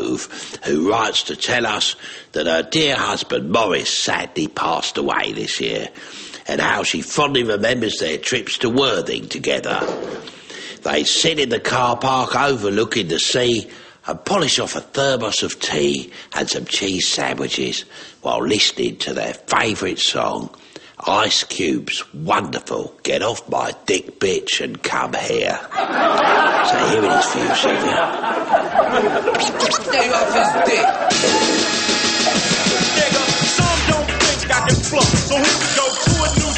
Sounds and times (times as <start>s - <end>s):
Speech: 0.0s - 9.9s, 10.8s - 25.7s, 26.6s - 28.1s, 29.4s - 31.0s
Music: 31.1s - 36.5s.